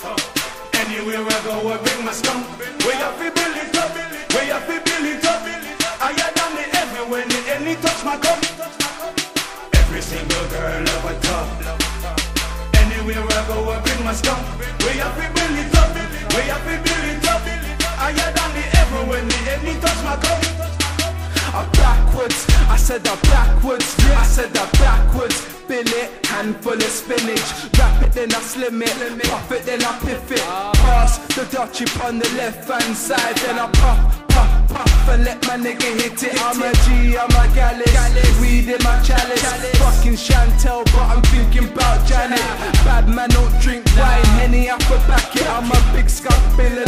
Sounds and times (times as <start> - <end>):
Music: 0.0 - 46.8.